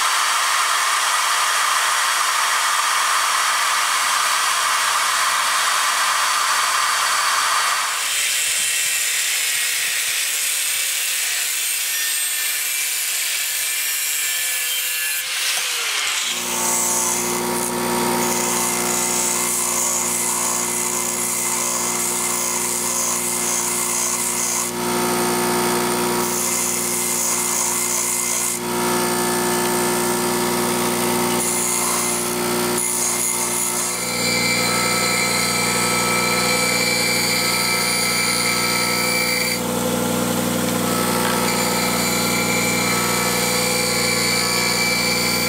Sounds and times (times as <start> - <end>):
Power tool: 0.0 - 45.4.